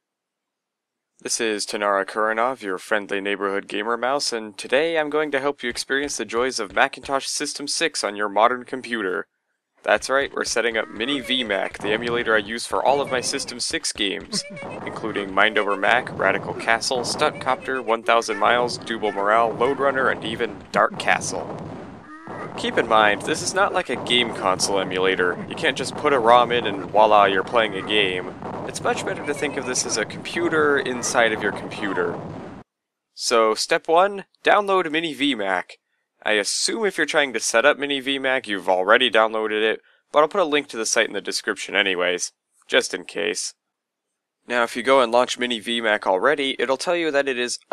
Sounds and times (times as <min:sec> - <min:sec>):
Speech: 0:01.3 - 0:09.2, 0:09.9 - 0:21.4, 0:22.6 - 0:32.1, 0:33.2 - 0:43.5, 0:44.5 - 0:47.7.